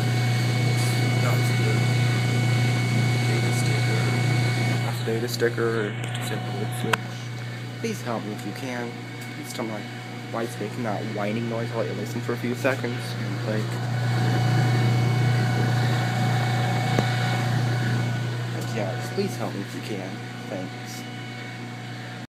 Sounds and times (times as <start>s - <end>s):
Vibration: 0.0s - 22.2s
Speech: 0.6s - 2.0s, 3.2s - 4.3s, 5.0s - 7.2s, 7.8s - 14.4s, 18.6s - 21.1s.